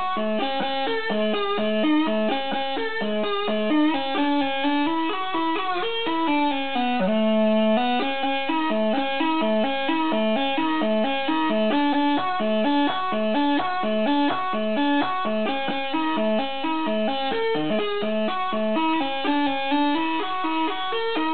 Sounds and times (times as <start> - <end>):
Bagpipes: 0.0 - 21.3.